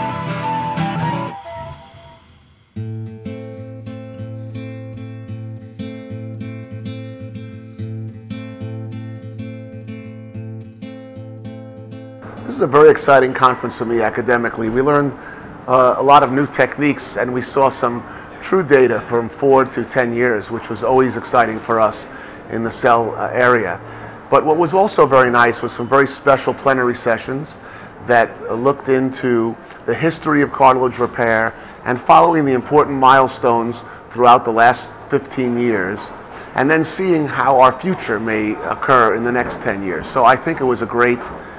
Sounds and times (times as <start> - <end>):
Music: 0.0 - 14.0
Speech: 12.5 - 41.4.